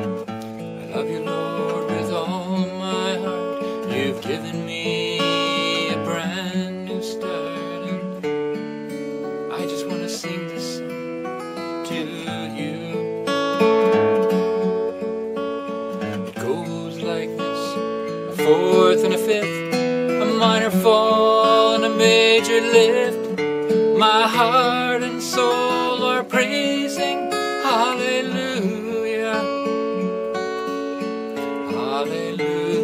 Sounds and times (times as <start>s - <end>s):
Strum: 0.0s - 32.8s.